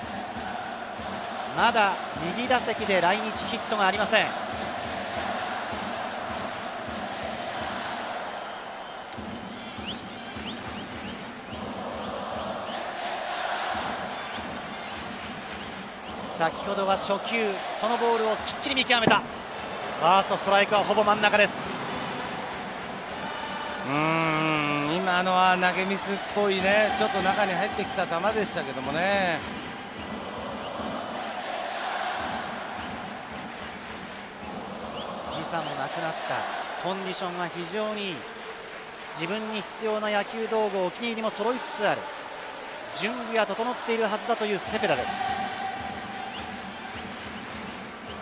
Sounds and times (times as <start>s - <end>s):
Music: 4.4s - 16.4s, 18.4s - 35.7s, 44.6s - 48.2s
Speech: 23.9s - 29.4s, 39.2s - 42.0s, 42.9s - 45.3s.